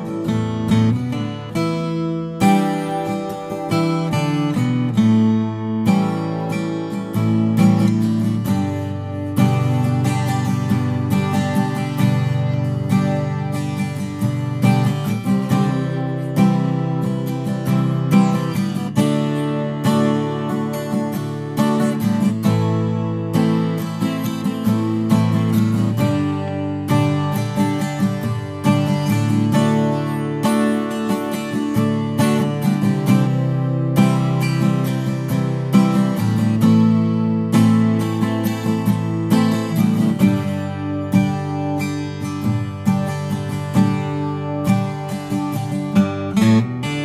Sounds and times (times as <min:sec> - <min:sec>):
Acoustic guitar: 0:00.0 - 0:47.0
Strum: 0:00.0 - 0:47.0.